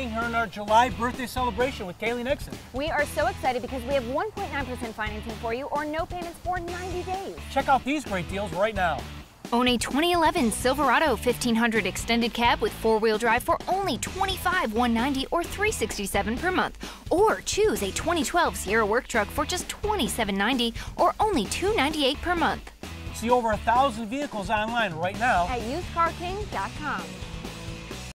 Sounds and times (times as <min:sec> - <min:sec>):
Speech: 0:00.0 - 0:09.0, 0:09.6 - 0:27.1
Music: 0:00.0 - 0:28.1.